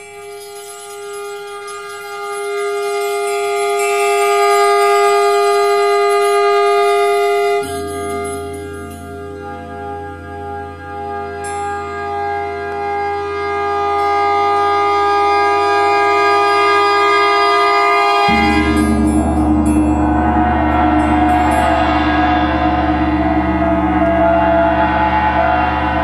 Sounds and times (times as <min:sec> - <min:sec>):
Gong: 0:00.0 - 0:26.0.